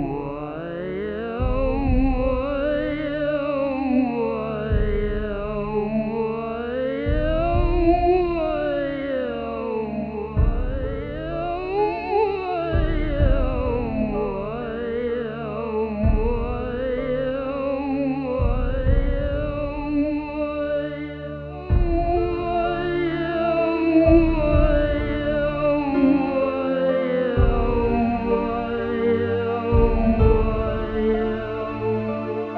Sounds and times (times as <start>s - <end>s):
Theremin: 0.0s - 32.5s.